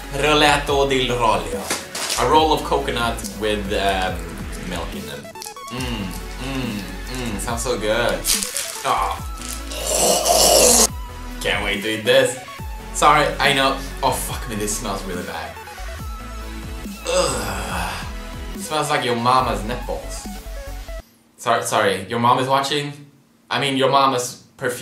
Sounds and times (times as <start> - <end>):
Music: 0.0 - 21.1
Inside, small room: 0.0 - 24.8
Speech: 0.1 - 8.2, 11.4 - 12.4, 13.0 - 15.6, 18.6 - 20.3, 21.4 - 24.8.